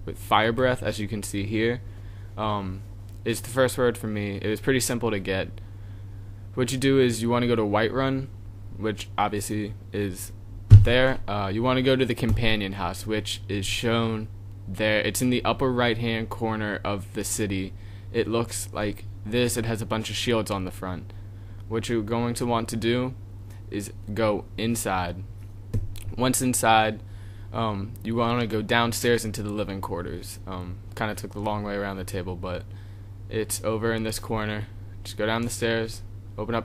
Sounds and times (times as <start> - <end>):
Speech: 0.0 - 1.8, 2.4 - 5.6, 6.6 - 21.1, 21.7 - 25.3, 26.0 - 27.0, 27.6 - 32.7, 33.3 - 36.6.